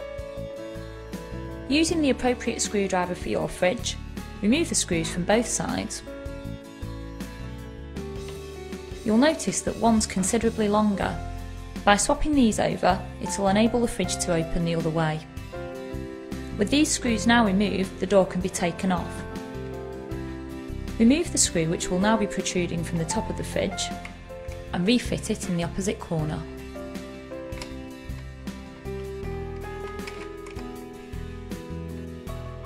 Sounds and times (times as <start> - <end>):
Music: 0.0 - 32.6
Speech: 1.7 - 6.1, 9.0 - 15.3, 16.6 - 19.3, 21.0 - 24.0, 24.8 - 26.5.